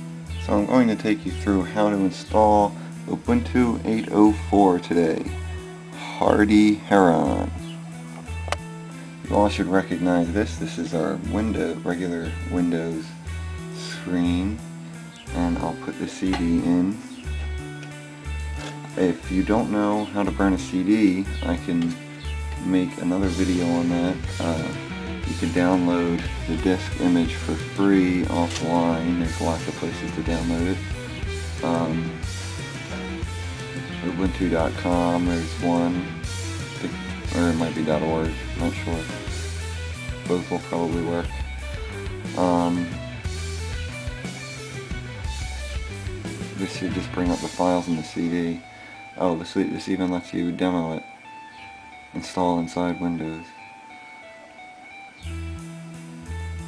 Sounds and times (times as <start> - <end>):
Music: 0.0 - 56.6
Speech: 0.4 - 5.3, 6.0 - 7.6, 9.3 - 13.2, 13.8 - 14.6, 15.3 - 17.0, 19.0 - 22.0, 22.6 - 30.8, 31.6 - 32.2, 34.0 - 36.1, 36.8 - 39.4, 40.3 - 41.4, 42.4 - 42.9, 46.6 - 48.6, 49.2 - 51.1, 52.2 - 53.6.